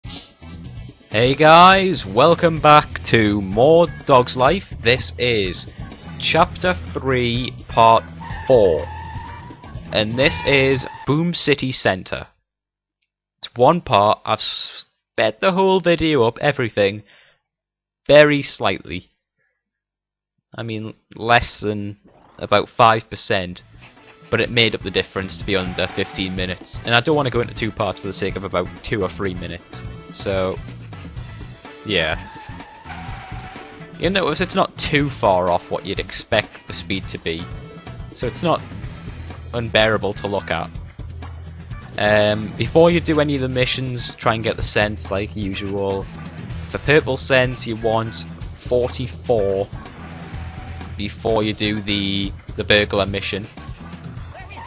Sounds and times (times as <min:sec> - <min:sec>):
Music: 0:00.0 - 0:11.1, 0:23.5 - 0:54.6
Speech: 0:01.1 - 0:08.9, 0:09.9 - 0:12.3, 0:13.4 - 0:17.1, 0:18.1 - 0:19.1, 0:20.6 - 0:23.6, 0:24.3 - 0:30.6, 0:31.9 - 0:32.2, 0:34.0 - 0:37.5, 0:38.2 - 0:38.6, 0:39.6 - 0:40.7, 0:42.0 - 0:46.0, 0:46.7 - 0:49.7, 0:51.0 - 0:53.5.